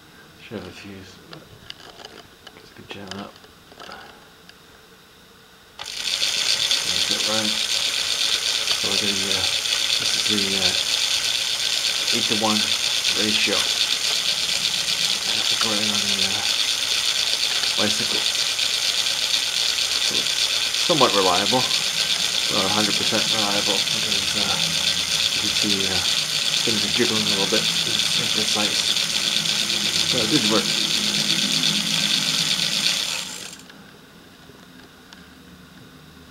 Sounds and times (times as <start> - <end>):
Gears: 5.8 - 33.7
Ratchet, pawl: 5.8 - 33.7.